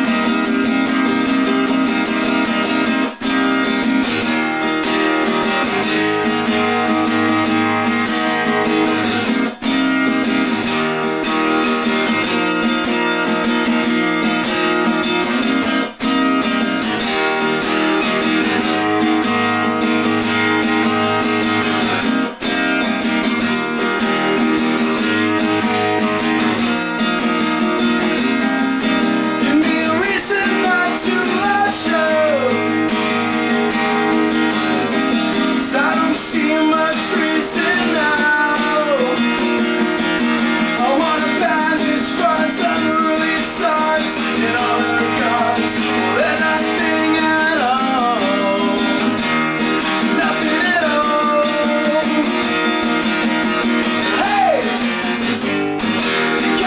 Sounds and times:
Music: 0.0 - 56.6.

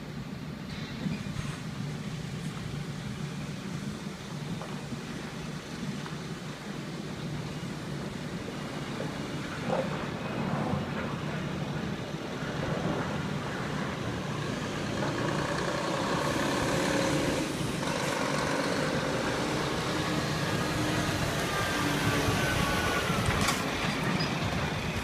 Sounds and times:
Truck: 0.0 - 25.0.

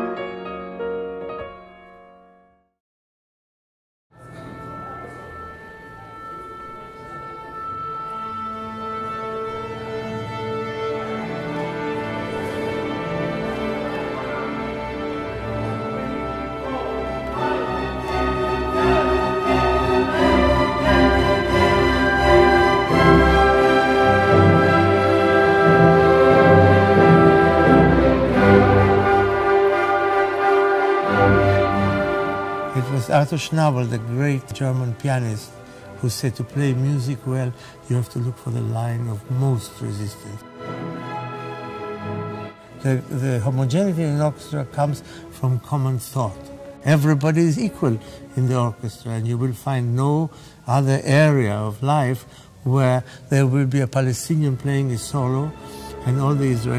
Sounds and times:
Orchestra: 0.0 - 2.4, 4.1 - 56.7
Speech: 32.7 - 40.4, 42.8 - 56.7.

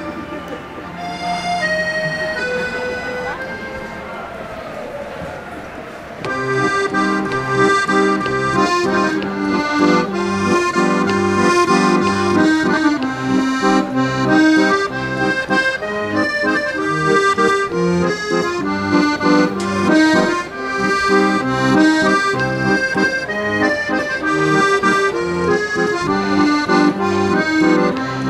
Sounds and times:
Music: 0.0 - 4.2, 6.2 - 28.2.

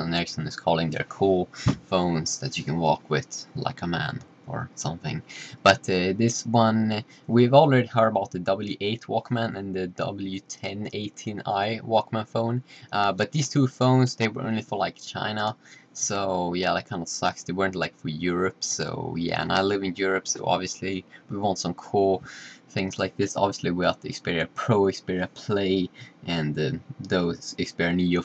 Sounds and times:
Speech: 0.0 - 28.2.

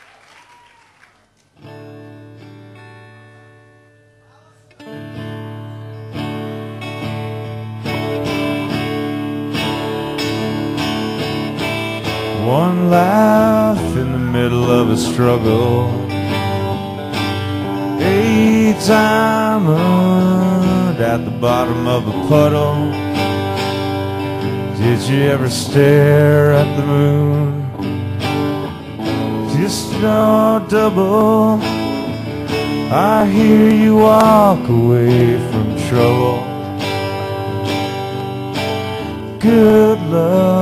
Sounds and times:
Music: 1.4 - 40.6.

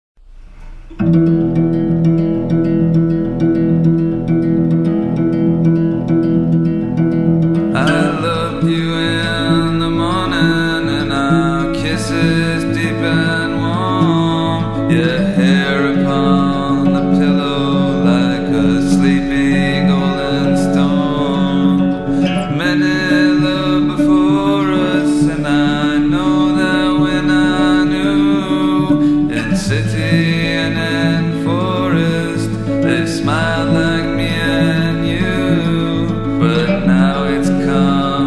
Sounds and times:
Music: 0.2 - 38.2.

